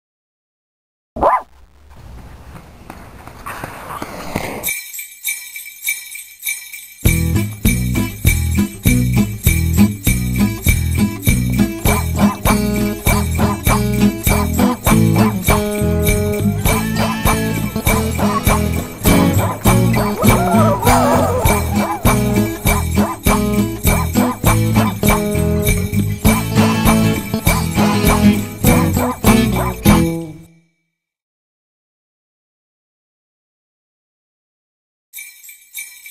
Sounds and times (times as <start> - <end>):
Jingle, tinkle: 4.6 - 31.0, 35.2 - 36.1.